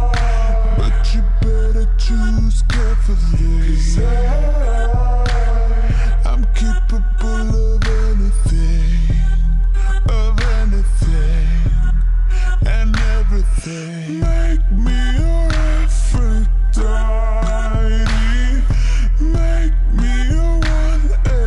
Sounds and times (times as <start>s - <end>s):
Music: 0.0s - 21.4s.